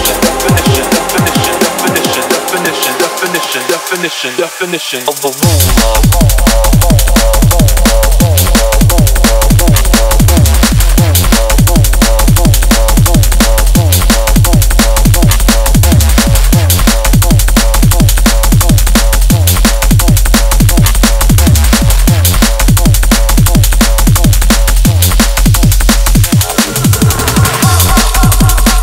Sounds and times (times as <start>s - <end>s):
Drum and bass: 0.0s - 28.8s.